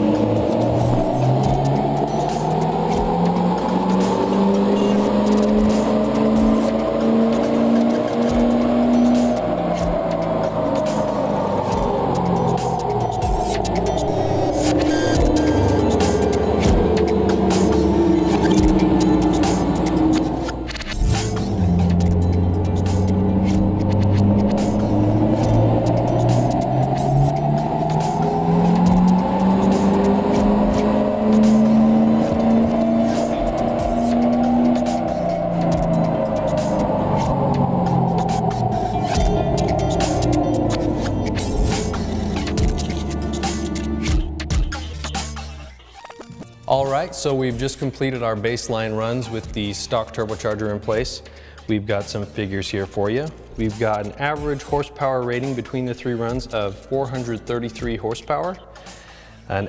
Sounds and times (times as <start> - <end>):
Car: 0.0 - 59.6
Music: 0.0 - 59.6.